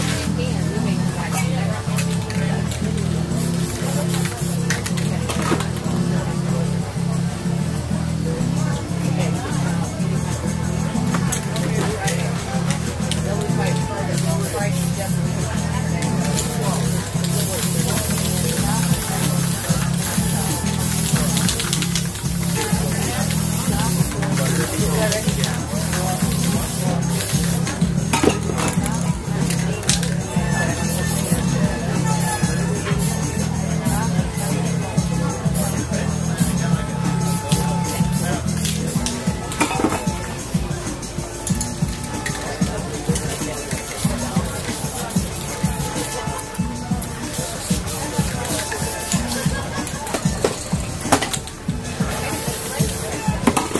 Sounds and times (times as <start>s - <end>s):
Spray: 0.0s - 5.8s, 10.8s - 53.7s
Music: 0.0s - 53.7s
Speech: 0.0s - 53.7s.